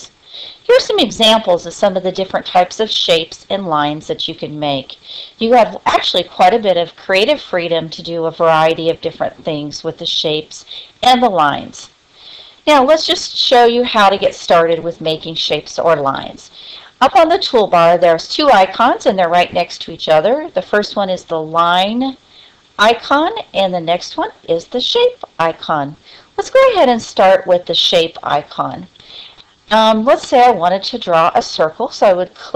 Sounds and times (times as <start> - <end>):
Speech: 0.0 - 11.9, 12.7 - 22.2, 22.8 - 29.0, 29.7 - 32.5.